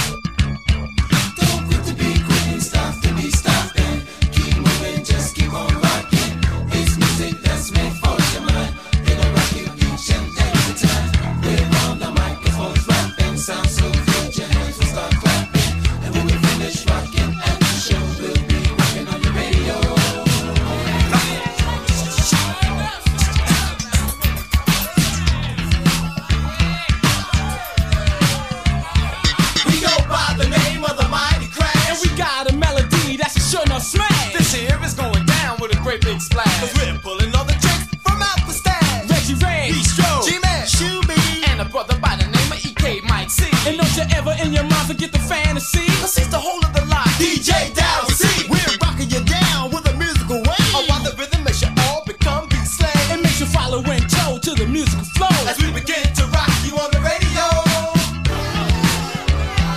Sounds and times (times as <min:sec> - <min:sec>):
Music: 0:00.0 - 0:59.7.